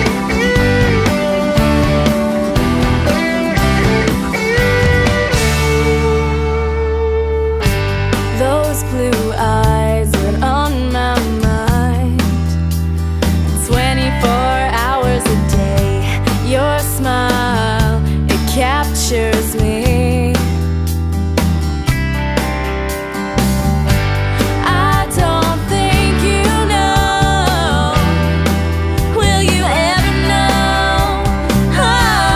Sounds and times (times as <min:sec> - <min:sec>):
Rhythm and blues: 0:00.0 - 0:32.3.